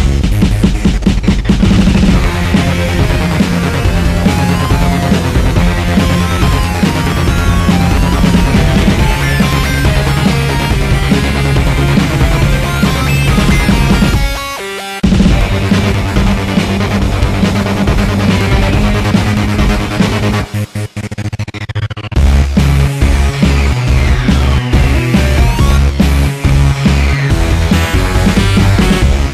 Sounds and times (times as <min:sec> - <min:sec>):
Music: 0:00.0 - 0:29.3.